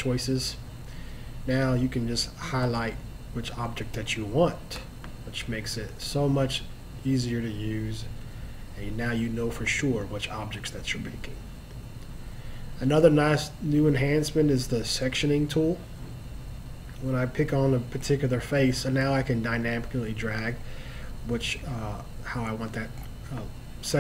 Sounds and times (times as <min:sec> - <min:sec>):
Speech: 0:00.0 - 0:00.6, 0:01.5 - 0:08.1, 0:08.8 - 0:11.4, 0:12.8 - 0:15.9, 0:17.0 - 0:20.6, 0:21.2 - 0:24.0.